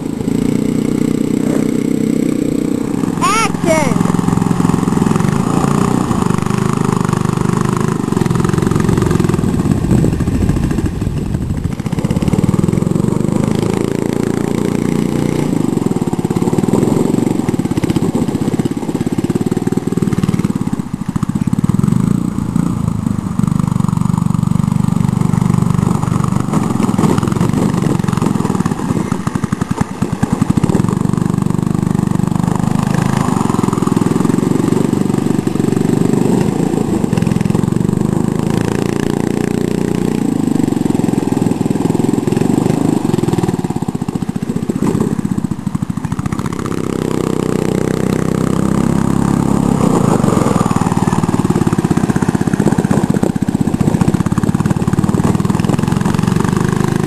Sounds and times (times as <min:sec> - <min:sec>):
Car: 0:00.0 - 0:57.0.